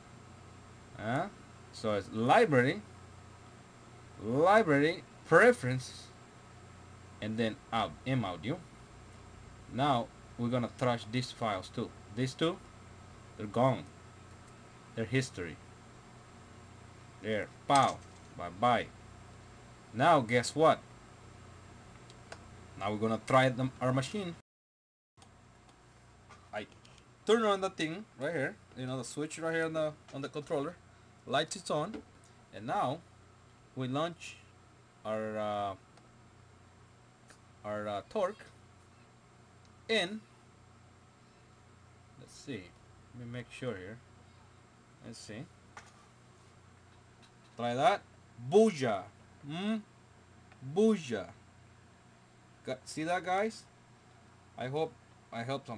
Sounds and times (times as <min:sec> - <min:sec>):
Speech: 0:01.0 - 0:02.9, 0:04.2 - 0:06.2, 0:07.2 - 0:08.7, 0:09.7 - 0:12.6, 0:13.4 - 0:14.0, 0:15.0 - 0:15.6, 0:17.2 - 0:19.0, 0:19.9 - 0:20.9, 0:22.8 - 0:24.4, 0:26.5 - 0:33.1, 0:33.8 - 0:35.8, 0:37.6 - 0:38.6, 0:39.9 - 0:40.3, 0:42.2 - 0:44.1, 0:45.0 - 0:45.6, 0:47.6 - 0:49.9, 0:50.6 - 0:51.4, 0:52.6 - 0:53.7, 0:54.6 - 0:55.7.